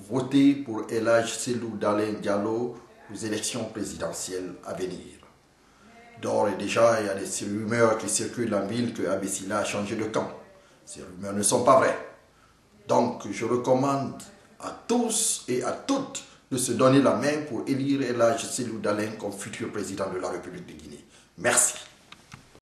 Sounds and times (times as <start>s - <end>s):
Speech: 0.0s - 12.2s, 12.8s - 21.9s.